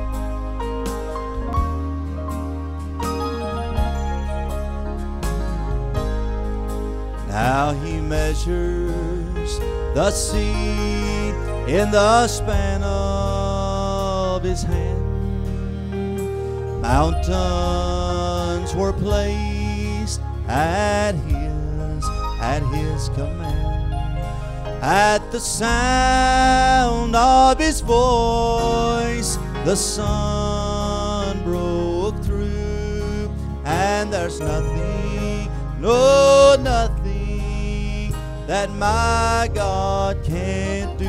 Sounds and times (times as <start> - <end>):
Music: 0.0 - 41.0
Male singing: 7.3 - 15.4, 16.8 - 23.7, 24.8 - 41.0.